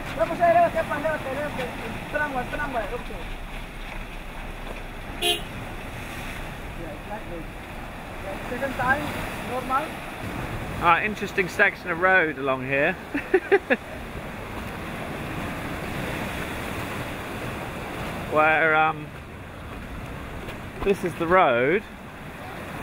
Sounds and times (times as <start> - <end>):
Waves, surf: 0.0 - 22.8.